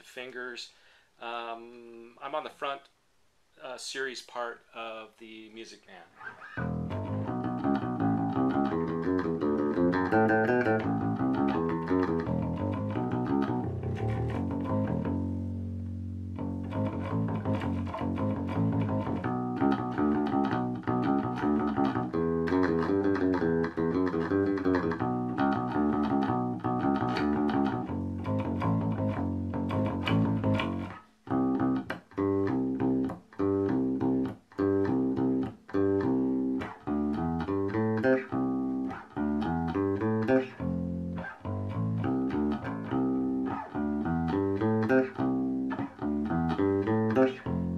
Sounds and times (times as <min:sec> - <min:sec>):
Bass guitar: 0:06.2 - 0:47.7.